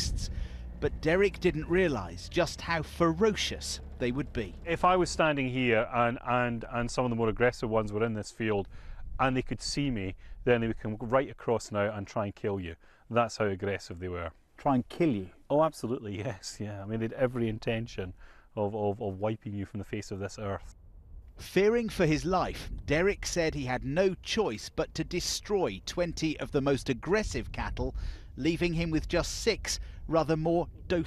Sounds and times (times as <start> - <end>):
Speech: 0.0 - 20.7, 21.4 - 31.0.